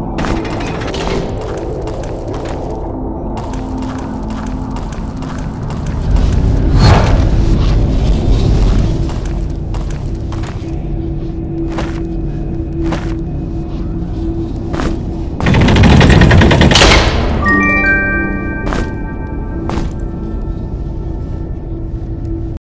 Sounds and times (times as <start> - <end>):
Sound effect: 3.4 - 10.7, 14.1 - 20.1.